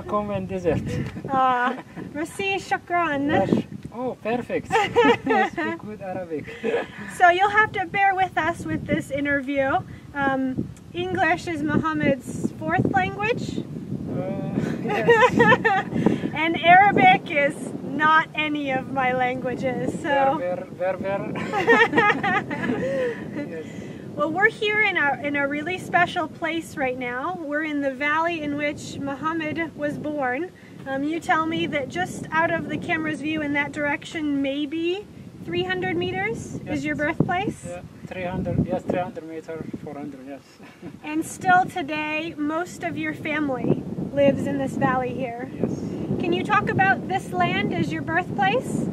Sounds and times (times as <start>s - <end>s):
Outside, rural or natural: 0.0s - 48.9s.